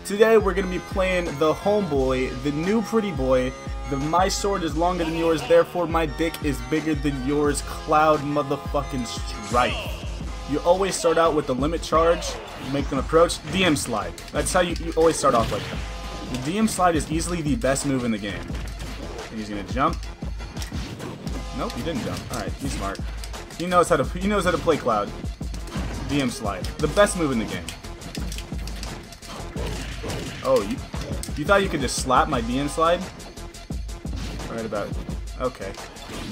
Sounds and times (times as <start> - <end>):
Speech: 0.0 - 15.7, 16.3 - 18.5, 19.3 - 20.0, 21.6 - 23.0, 23.6 - 25.2, 26.0 - 27.7, 30.4 - 30.8, 31.4 - 33.1, 34.5 - 35.8
Music: 0.0 - 36.3.